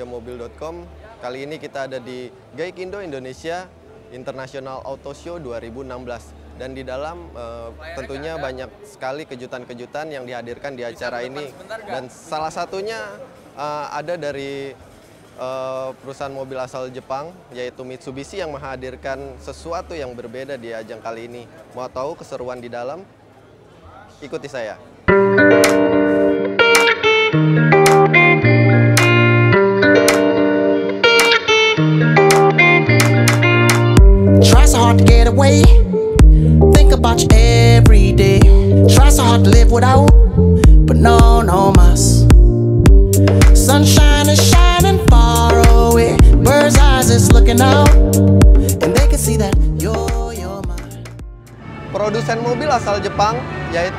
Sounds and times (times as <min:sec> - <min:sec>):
Music: 0:02.8 - 0:08.6, 0:25.1 - 0:53.9.